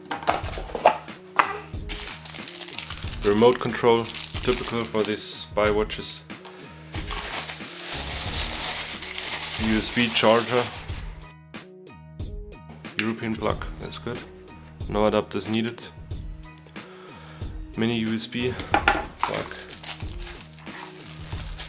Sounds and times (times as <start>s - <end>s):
Music: 0.0s - 21.6s
Speech: 3.2s - 6.3s, 9.6s - 10.8s, 13.0s - 15.9s, 17.8s - 18.7s, 19.3s - 19.6s.